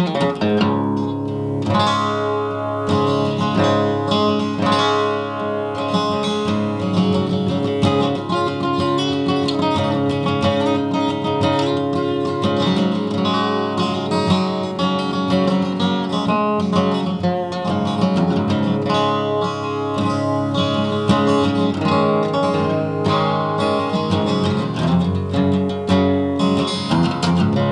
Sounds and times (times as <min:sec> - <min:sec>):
Acoustic guitar: 0:00.0 - 0:27.7.